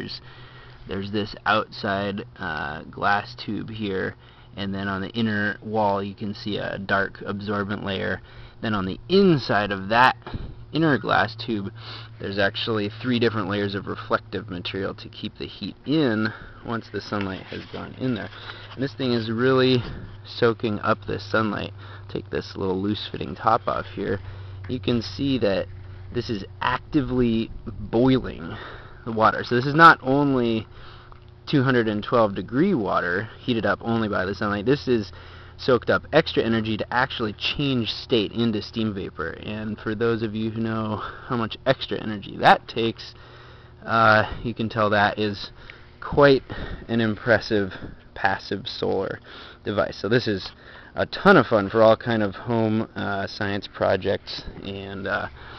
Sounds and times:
Speech: 0.0s - 0.2s, 0.9s - 30.7s, 31.5s - 43.2s, 43.8s - 55.3s.

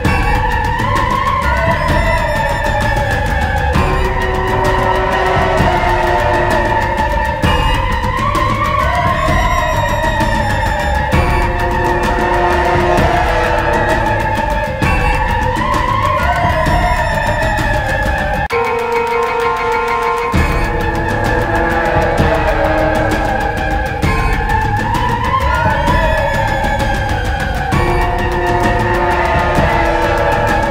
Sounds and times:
Scary music: 0.0s - 30.7s.

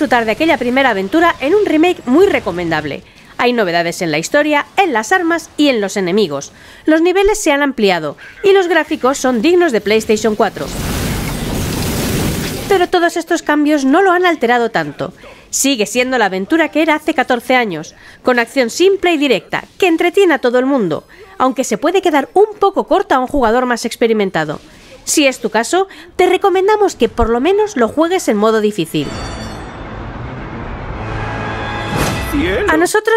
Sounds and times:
Speech: 0.0s - 10.8s, 12.7s - 29.1s, 32.3s - 33.1s.

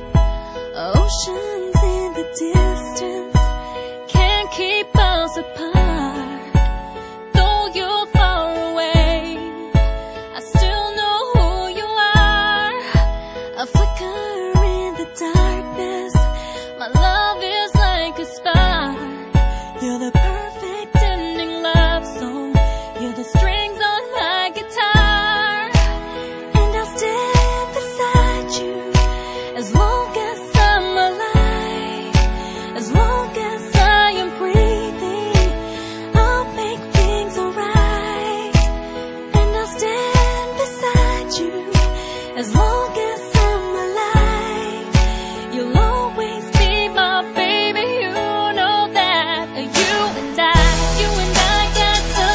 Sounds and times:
Music: 0.0s - 52.3s.

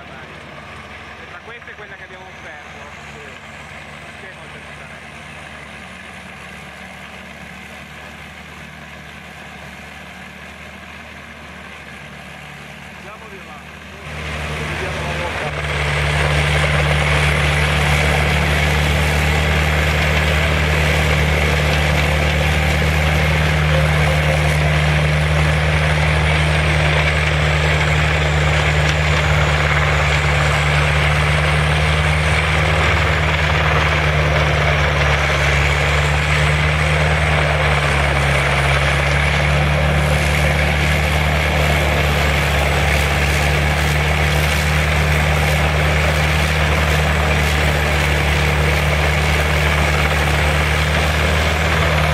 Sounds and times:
Speech: 0.0s - 0.4s, 1.2s - 3.5s, 4.1s - 5.0s, 13.0s - 15.6s
Vehicle: 0.0s - 52.1s
Accelerating, revving, vroom: 14.1s - 52.1s.

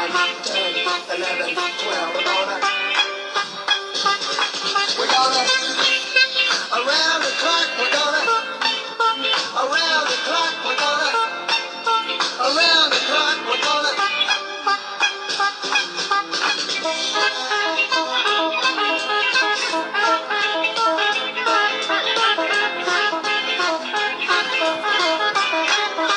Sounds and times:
Music: 0.0s - 26.1s.

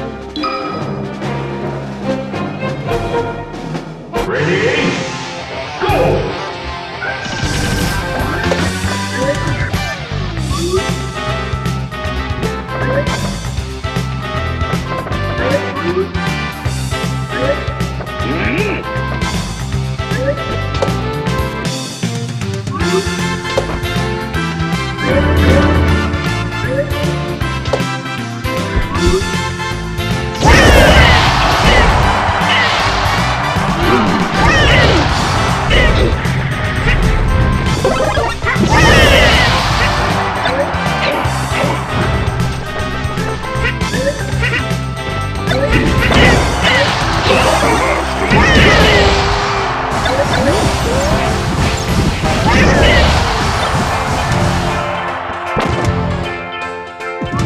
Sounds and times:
Music: 0.0s - 57.4s.

